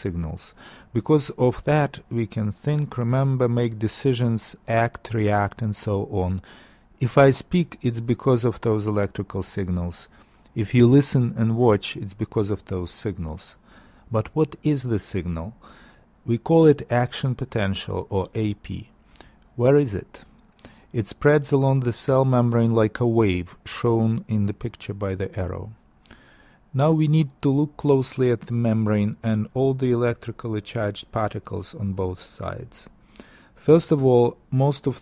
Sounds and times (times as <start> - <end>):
Speech: 0.0 - 15.6, 16.2 - 19.0, 19.6 - 20.3, 20.9 - 25.8, 26.7 - 32.9, 33.6 - 35.0.